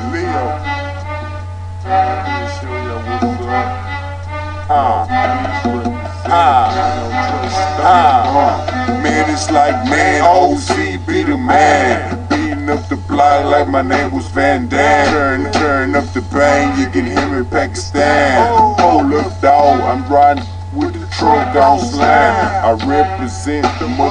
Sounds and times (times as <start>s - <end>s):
Music: 0.0s - 24.1s.